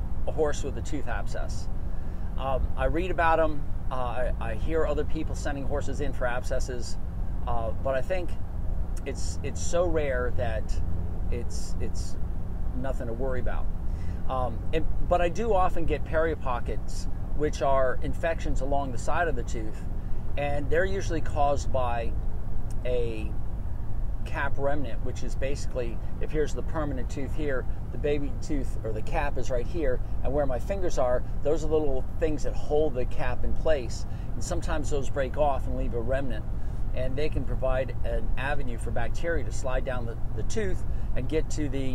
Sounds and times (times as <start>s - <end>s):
Speech: 0.3s - 1.7s, 2.4s - 8.4s, 9.0s - 12.2s, 12.8s - 13.7s, 14.3s - 19.8s, 20.4s - 22.2s, 22.8s - 23.4s, 24.2s - 36.4s, 37.0s - 41.9s.